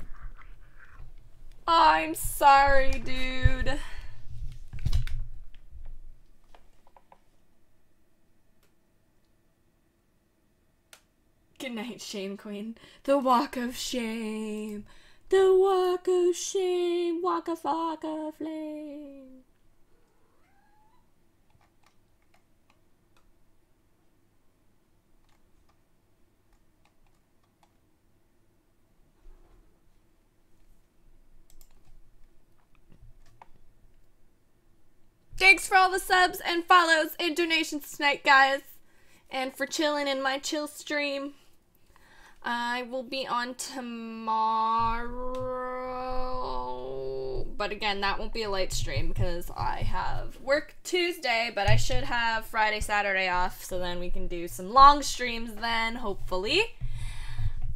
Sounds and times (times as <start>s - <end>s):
Speech: 1.7s - 3.8s, 11.6s - 19.4s, 35.4s - 38.7s, 39.3s - 41.4s, 42.4s - 56.8s.